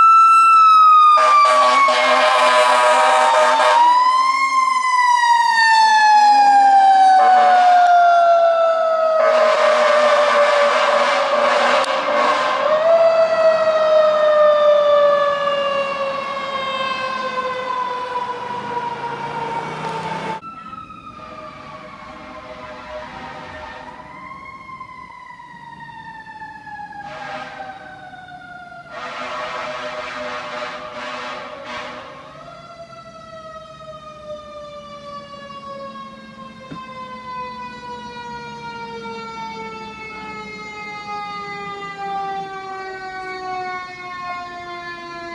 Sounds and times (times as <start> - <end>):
Fire engine, fire truck (siren): 0.0 - 45.3.